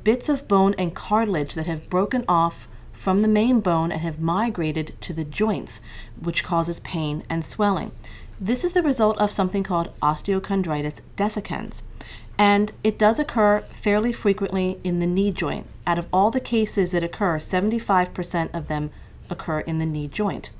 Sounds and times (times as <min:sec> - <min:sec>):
Speech: 0:00.0 - 0:20.5.